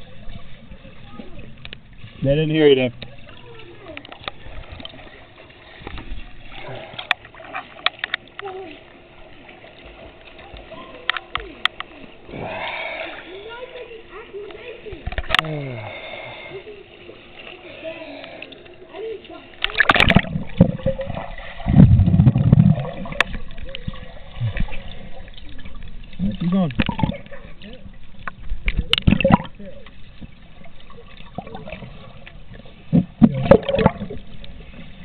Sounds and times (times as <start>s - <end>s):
Splash, splatter: 19.7s - 25.2s.